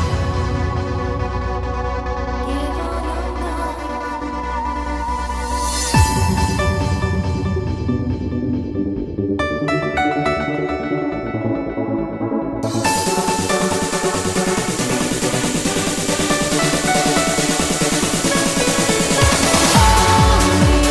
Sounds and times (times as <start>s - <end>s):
Trance music: 0.0s - 20.9s.